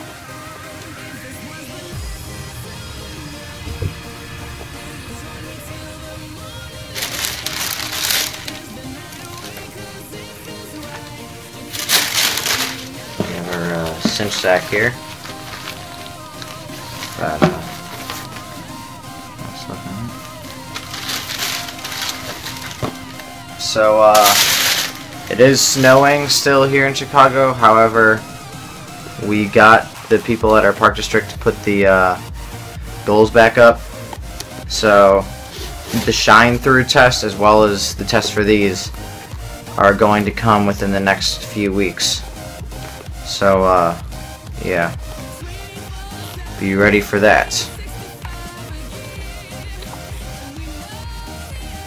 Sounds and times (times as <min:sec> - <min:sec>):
Music: 0:00.0 - 0:51.8.